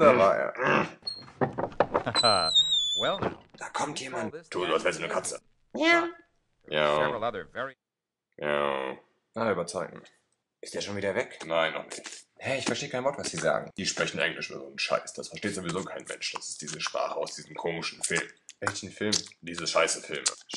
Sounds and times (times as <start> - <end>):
Speech: 0.0 - 0.6, 3.1 - 6.1, 6.7 - 7.8, 8.4 - 20.5.